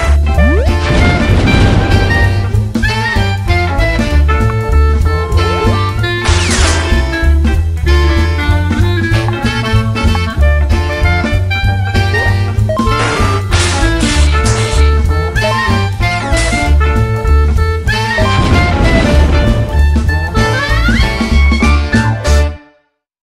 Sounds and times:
Music: 0.0s - 23.1s.

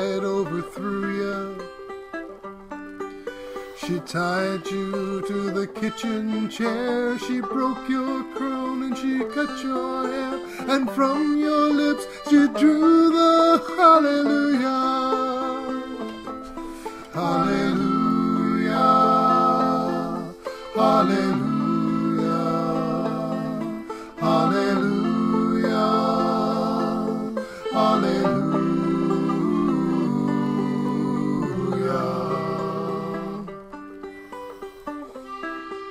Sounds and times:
Banjo: 0.0s - 35.9s
Inside, small room: 0.0s - 35.9s
Singing: 17.1s - 33.5s.

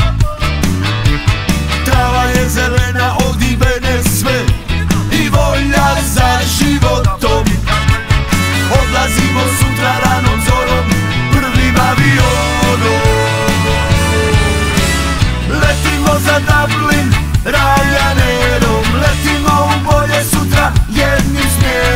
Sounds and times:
Background music: 0.0s - 21.9s.

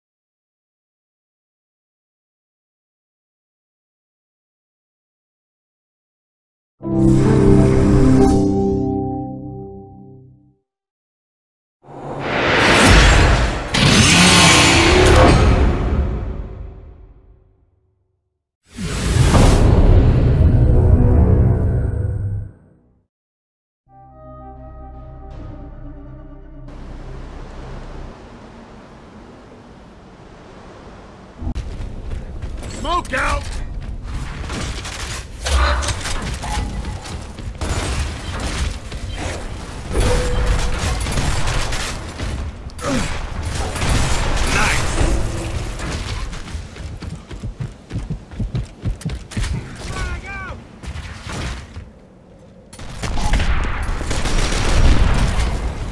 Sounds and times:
Speech: 32.7s - 33.7s, 44.5s - 44.9s, 49.8s - 50.6s.

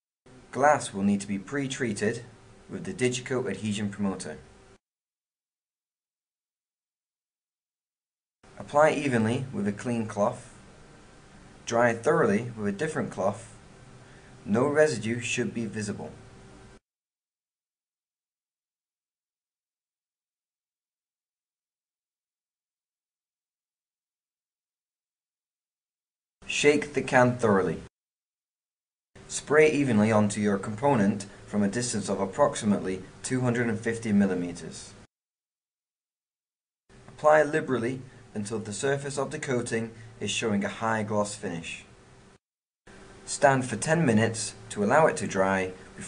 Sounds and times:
Speech: 0.5s - 4.5s, 8.6s - 10.6s, 11.6s - 13.6s, 14.4s - 16.2s, 26.5s - 27.9s, 29.3s - 35.1s, 37.2s - 41.9s, 43.3s - 46.0s.

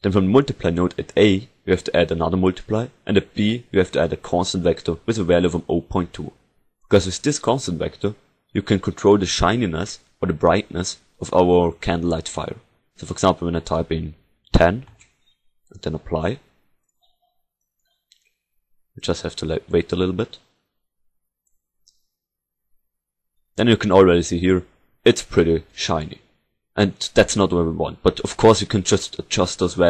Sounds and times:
Speech: 0.0s - 15.0s, 15.8s - 16.5s, 19.0s - 20.5s, 23.6s - 29.8s.

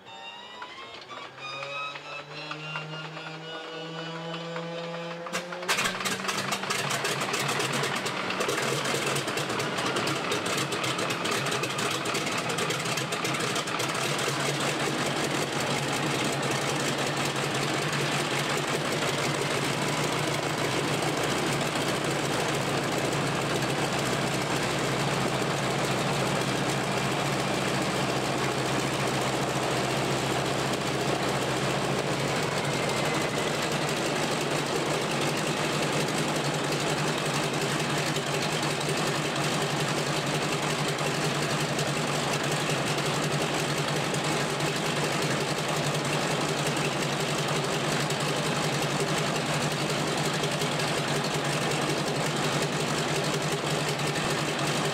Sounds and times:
Vehicle: 0.0s - 54.9s
Idling: 2.6s - 54.9s.

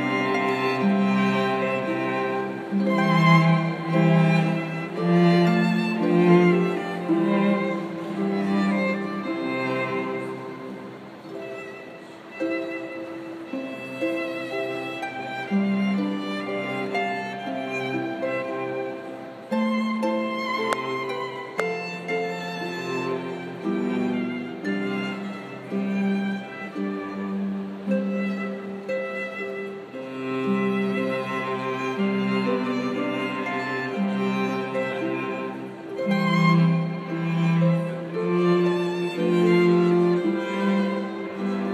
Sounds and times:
Pizzicato: 0.0s - 41.7s.

